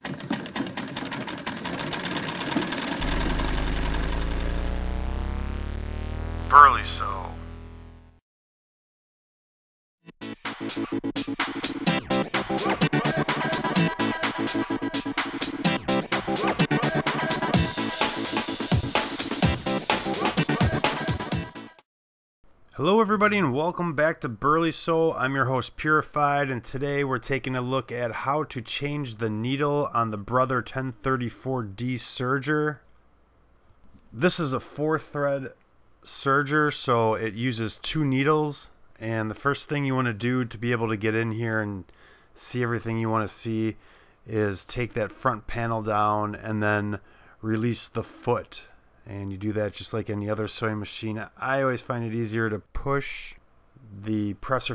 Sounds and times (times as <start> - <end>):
Speech: 6.5 - 7.4, 22.7 - 32.8, 34.2 - 54.7.